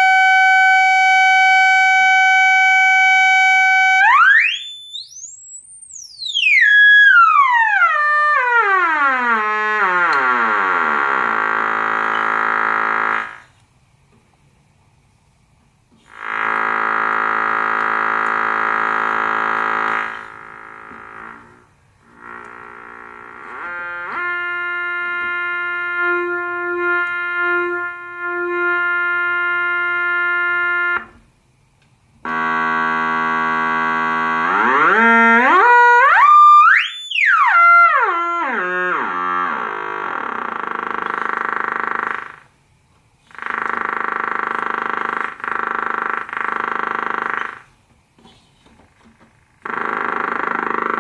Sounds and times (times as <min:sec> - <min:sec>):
Sampler: 0:00.0 - 0:13.5, 0:16.1 - 0:31.2, 0:32.2 - 0:42.5, 0:49.6 - 0:51.0.